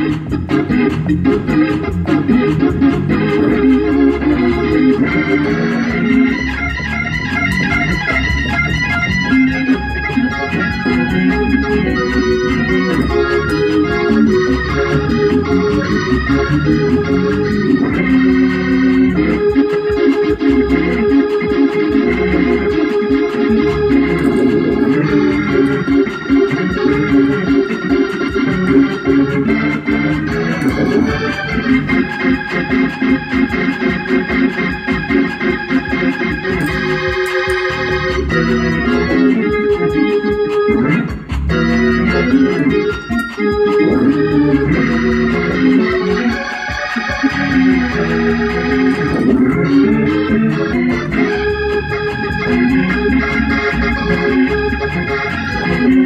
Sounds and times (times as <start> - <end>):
Hammond organ: 0.0 - 56.0.